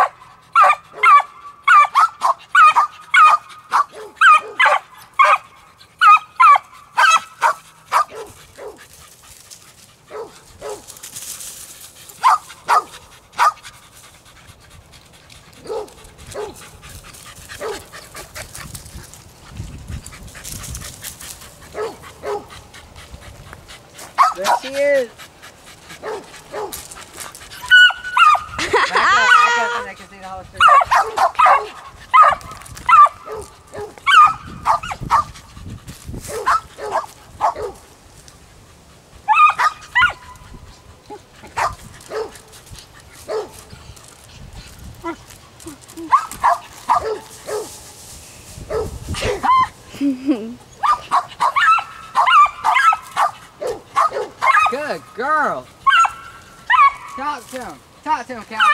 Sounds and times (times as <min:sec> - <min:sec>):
Yip: 0:00.0 - 0:08.8, 0:27.6 - 0:28.5, 0:30.6 - 0:35.3, 0:39.3 - 0:40.4, 0:50.8 - 0:54.8, 0:55.9 - 0:57.2.